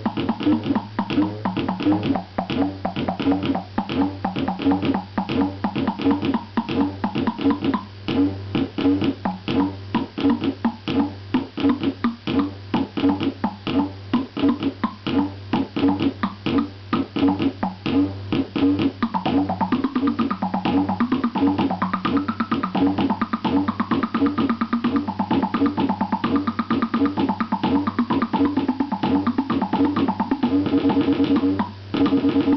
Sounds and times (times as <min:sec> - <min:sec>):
Music: 0:00.0 - 0:32.5.